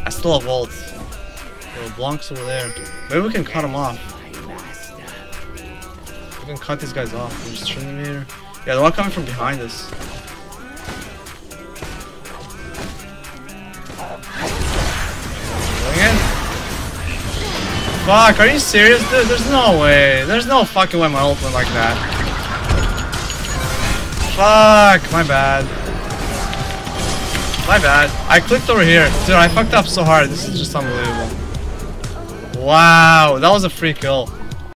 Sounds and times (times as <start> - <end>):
Speech: 0.0 - 0.9, 1.8 - 4.7, 6.4 - 9.9, 18.1 - 22.0, 24.2 - 25.7, 27.6 - 31.3, 32.6 - 34.3.